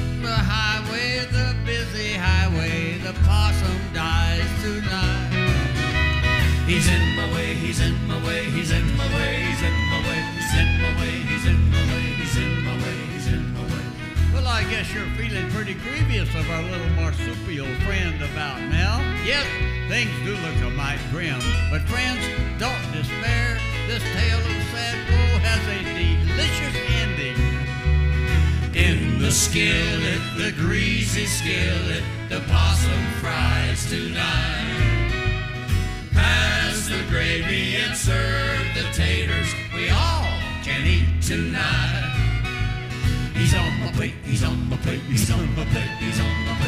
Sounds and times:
Bluegrass: 0.0 - 46.6
Song: 0.0 - 46.6.

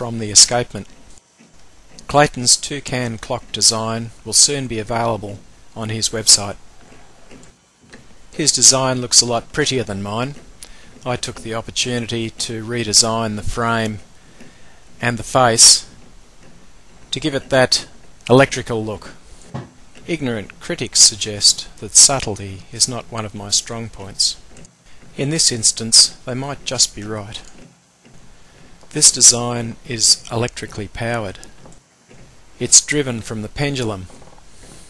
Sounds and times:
Speech: 0.0 - 0.9, 2.0 - 6.6, 8.3 - 10.4, 11.0 - 14.1, 15.0 - 16.0, 17.1 - 19.2, 20.0 - 24.4, 25.2 - 27.5, 28.9 - 31.5, 32.6 - 34.1.

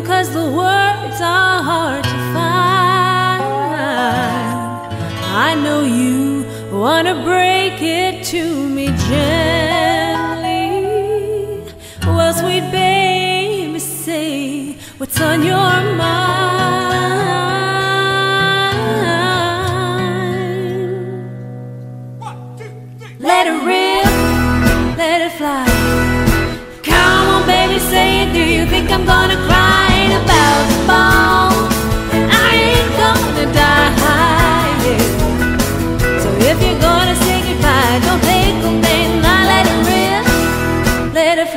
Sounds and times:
Speech: 22.2 - 23.9
Exciting music: 25.8 - 41.2.

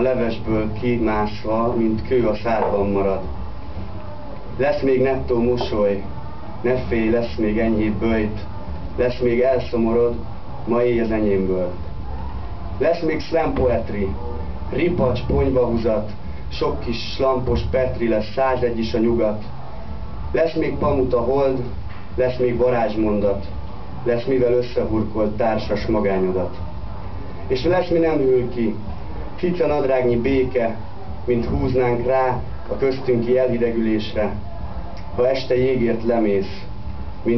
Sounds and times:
Speech: 0.0 - 3.3, 4.6 - 11.8, 12.8 - 19.5, 20.4 - 26.6, 27.5 - 34.4, 35.2 - 37.3.

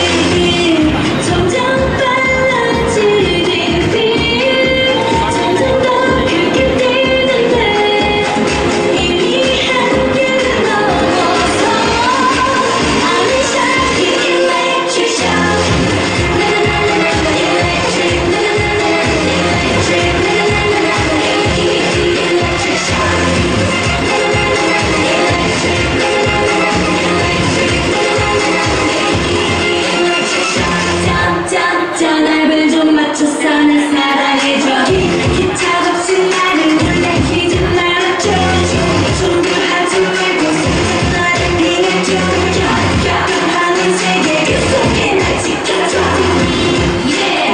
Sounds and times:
Inside, large room or hall: 0.0 - 47.5
Music: 0.0 - 47.5.

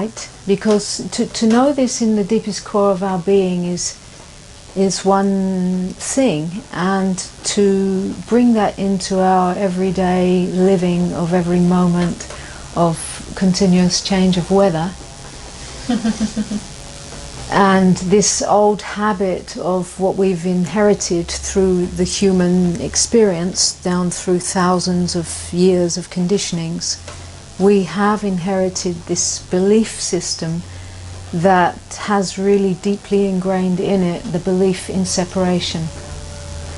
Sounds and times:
Speech: 0.0 - 4.0, 4.8 - 15.0, 17.5 - 27.0, 27.6 - 30.6, 31.3 - 35.9.

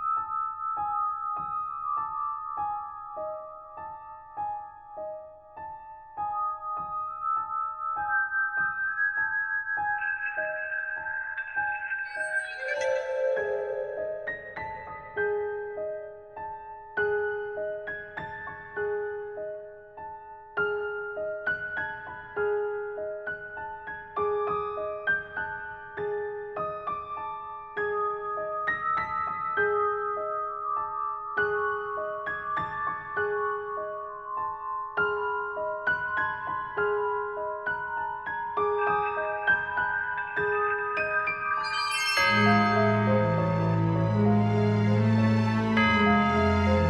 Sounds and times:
Music: 0.0 - 46.8.

